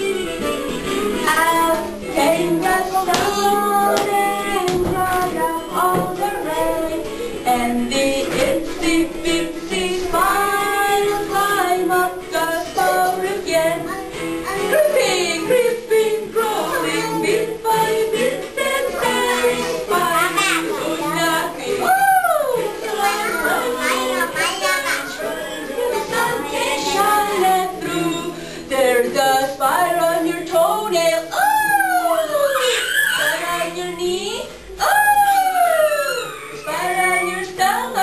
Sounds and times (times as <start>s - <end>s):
Music: 0.0s - 38.0s
Child singing: 1.2s - 38.0s
Female singing: 1.2s - 38.0s.